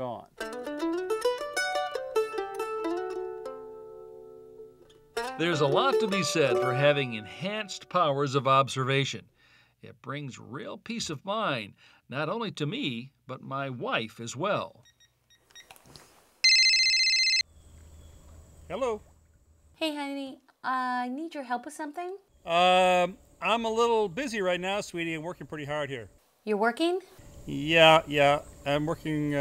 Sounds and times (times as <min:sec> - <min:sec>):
Mandolin: 0:00.4 - 0:07.9
Speech: 0:05.4 - 0:09.2, 0:09.8 - 0:14.8, 0:18.7 - 0:19.0, 0:19.8 - 0:29.4.